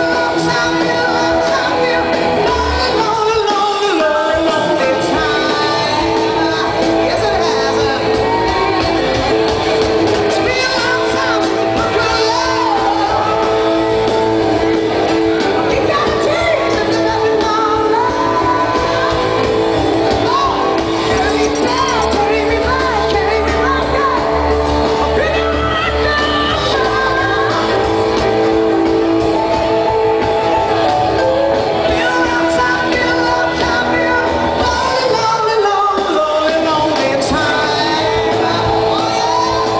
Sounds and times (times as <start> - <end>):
Rock music: 0.0 - 39.8
Shout: 0.0 - 39.8.